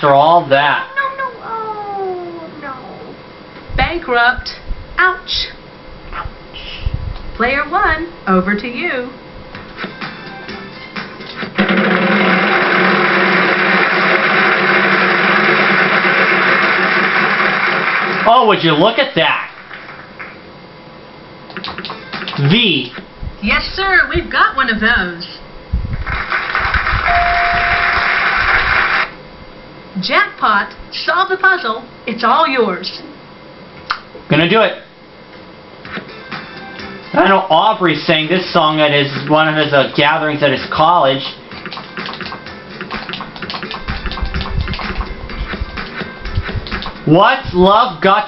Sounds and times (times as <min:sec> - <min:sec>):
Music: 0:09.5 - 0:13.1, 0:21.7 - 0:22.5, 0:35.8 - 0:37.6, 0:38.3 - 0:47.2.